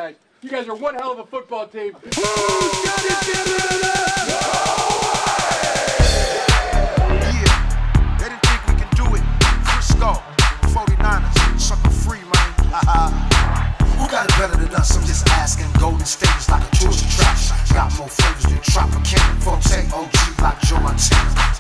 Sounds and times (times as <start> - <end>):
Speech: 0.0 - 4.2, 8.2 - 9.2
Pop music: 2.1 - 21.6.